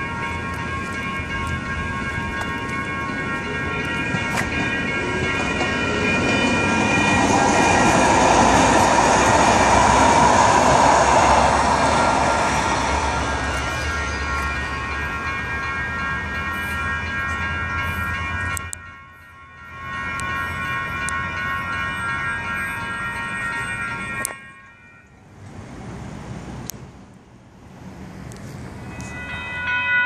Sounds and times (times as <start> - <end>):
Outside, urban or manmade: 0.0 - 30.0
Train: 0.0 - 30.0
Train wheels squealing: 5.6 - 15.3, 28.8 - 30.0.